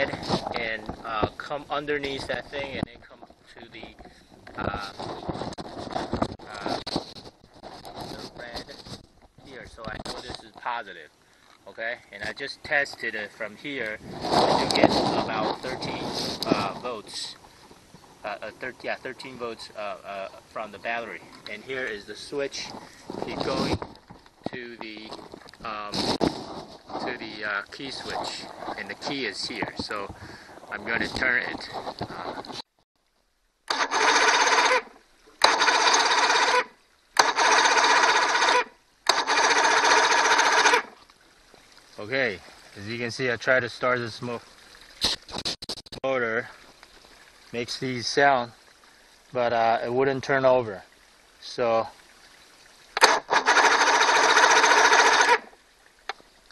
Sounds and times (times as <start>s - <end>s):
Speech: 0.0s - 4.0s, 4.6s - 5.0s, 6.4s - 6.8s, 8.2s - 8.8s, 9.4s - 11.1s, 11.7s - 14.0s, 14.7s - 17.4s, 18.2s - 23.8s, 24.5s - 26.0s, 27.0s - 32.4s, 42.0s - 44.5s, 46.0s - 46.6s, 47.5s - 48.6s, 49.4s - 52.0s
Outside, urban or manmade: 0.0s - 56.5s
Engine: 33.7s - 41.0s, 53.0s - 55.6s.